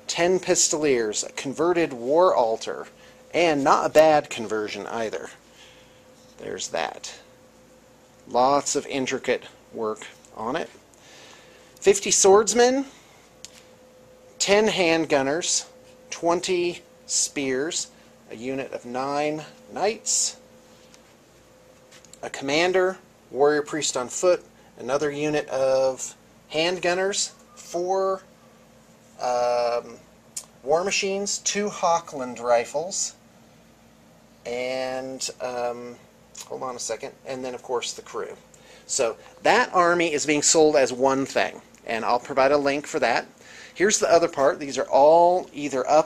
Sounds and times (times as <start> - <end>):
Speech: 0.0 - 5.4, 6.4 - 7.3, 8.3 - 10.8, 11.8 - 13.0, 14.4 - 20.4, 22.2 - 28.3, 29.2 - 33.2, 34.4 - 46.0.